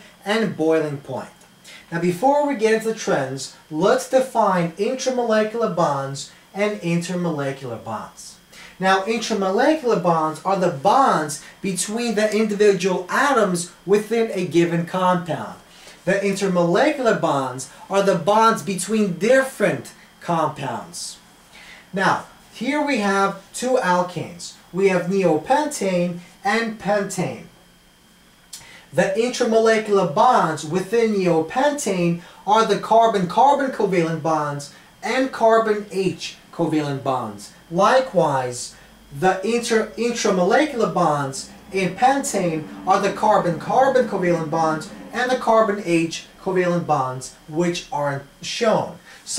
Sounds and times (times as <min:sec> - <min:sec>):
Speech: 0:00.0 - 0:21.2, 0:21.9 - 0:27.6, 0:28.9 - 0:49.3.